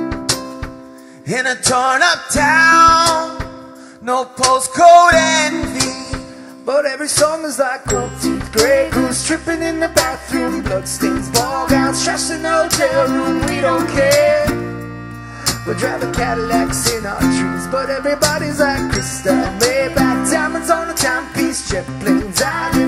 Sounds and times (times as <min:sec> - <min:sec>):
Music: 0:00.0 - 0:22.8.